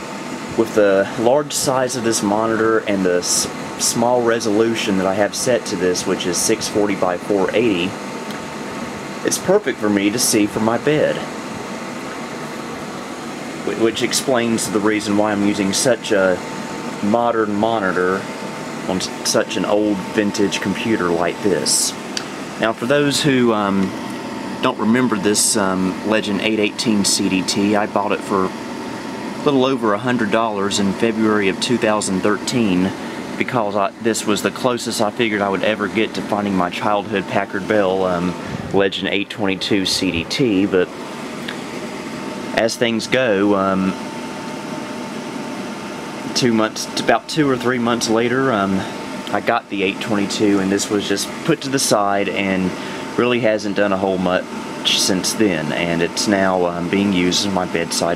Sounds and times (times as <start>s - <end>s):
Speech: 0.5s - 8.0s, 9.2s - 11.3s, 13.6s - 18.3s, 18.9s - 22.0s, 22.6s - 24.0s, 24.6s - 28.6s, 29.4s - 40.9s, 42.5s - 44.0s, 46.3s - 58.1s.